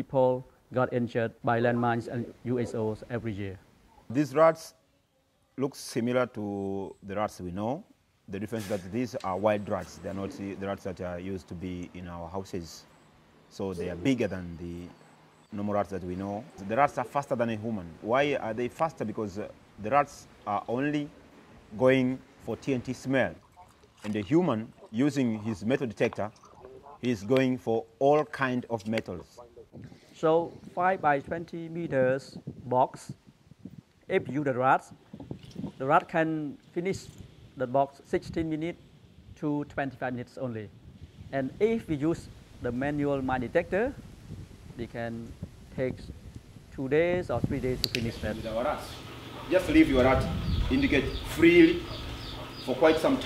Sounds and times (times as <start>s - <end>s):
Speech: 0.0s - 4.8s, 5.6s - 12.8s, 13.5s - 14.9s, 15.5s - 21.1s, 21.8s - 23.4s, 24.0s - 33.2s, 34.1s - 35.0s, 35.8s - 38.8s, 39.4s - 40.7s, 41.3s - 44.0s, 44.8s - 46.1s, 46.8s - 51.8s, 52.6s - 53.2s.